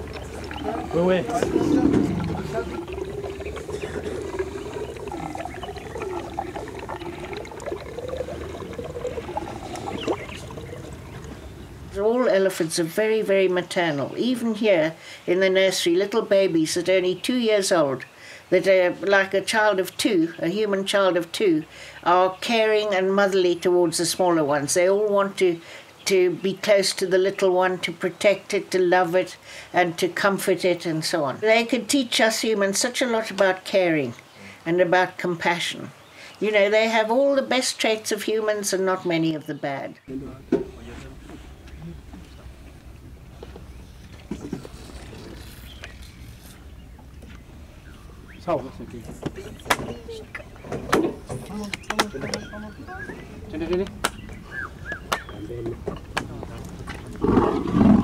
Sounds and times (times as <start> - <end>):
Wild animals: 0.0 - 11.6, 57.0 - 58.0.